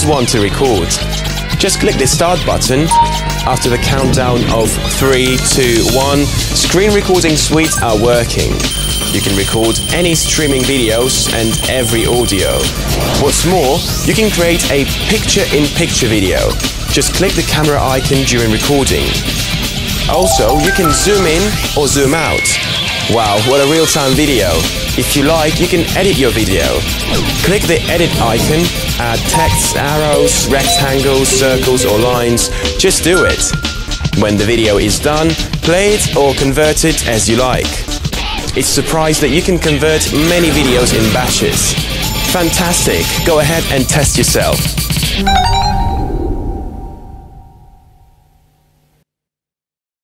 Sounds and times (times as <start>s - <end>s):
Speech: 0.0s - 19.2s, 20.1s - 33.6s, 34.2s - 45.4s
Music: 0.0s - 48.2s.